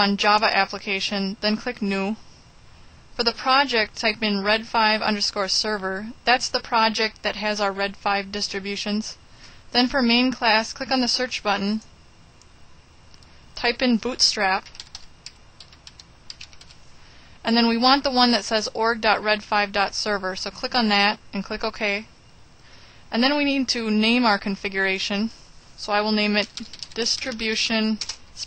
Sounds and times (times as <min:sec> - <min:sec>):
Speech: 0:00.0 - 0:02.2, 0:03.2 - 0:09.2, 0:09.8 - 0:11.9, 0:13.6 - 0:14.7, 0:17.4 - 0:22.1, 0:23.1 - 0:28.4.